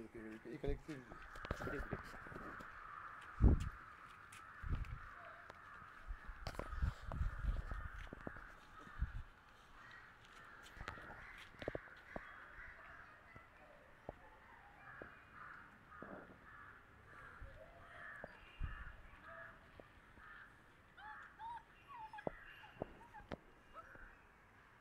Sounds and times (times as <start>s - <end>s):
Animal: 0.5s - 24.2s.